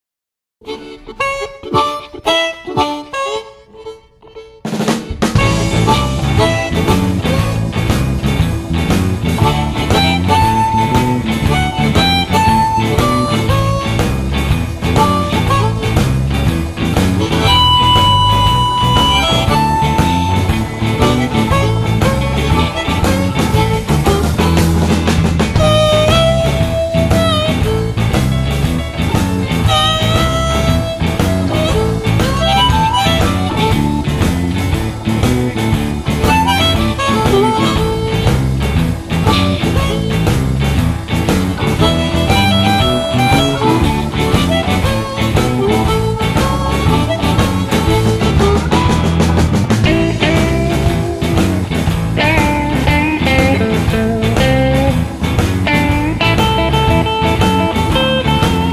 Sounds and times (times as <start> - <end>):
Wind instrument, woodwind instrument: 0.6 - 7.7, 9.4 - 14.3, 15.0 - 16.2, 17.2 - 24.7, 25.6 - 28.5, 29.6 - 34.5, 36.2 - 38.6, 41.7 - 51.0
Harmonica: 0.6 - 58.7.